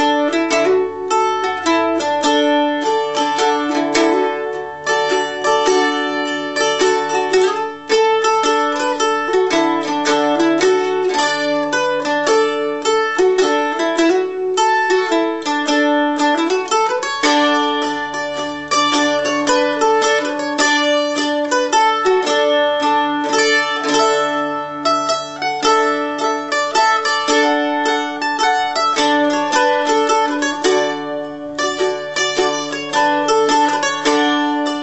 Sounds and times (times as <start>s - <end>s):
Music: 0.0s - 34.8s.